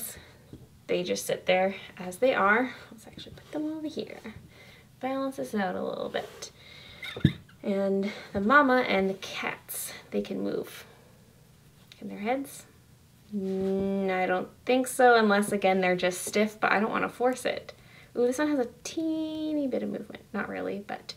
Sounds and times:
Speech: 0:00.9 - 0:04.4, 0:05.0 - 0:06.5, 0:07.6 - 0:10.9, 0:12.0 - 0:12.7, 0:13.3 - 0:21.1.

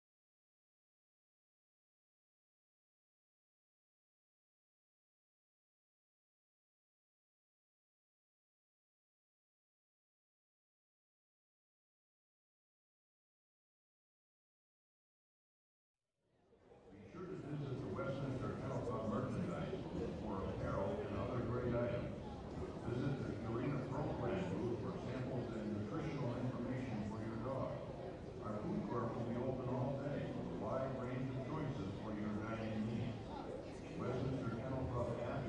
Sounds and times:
Speech: 0:16.4 - 0:35.4.

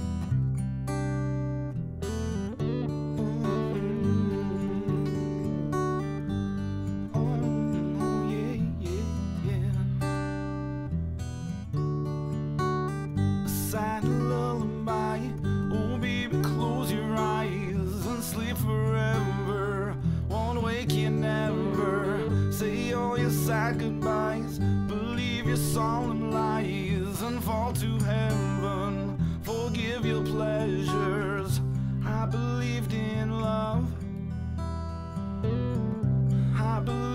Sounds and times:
Music: 0:00.0 - 0:37.1.

